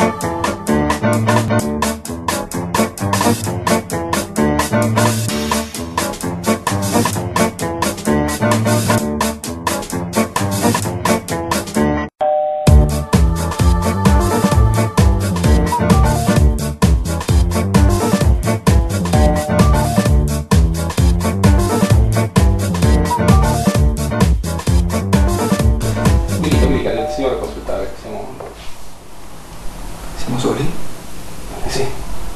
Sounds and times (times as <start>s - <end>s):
Music: 0.0s - 27.6s.